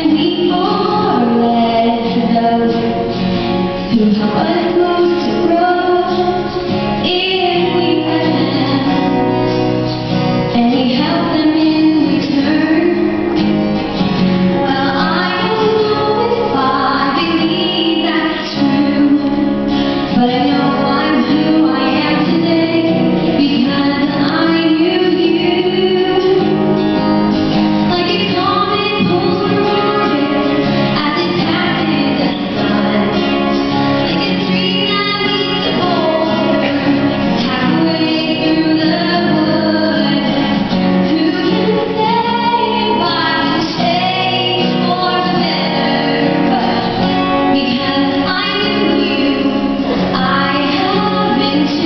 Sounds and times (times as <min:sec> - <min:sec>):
Female singing: 0:00.0 - 0:03.0, 0:03.9 - 0:09.3, 0:10.5 - 0:13.3, 0:14.6 - 0:26.6, 0:27.9 - 0:51.8
Music: 0:00.0 - 0:51.8.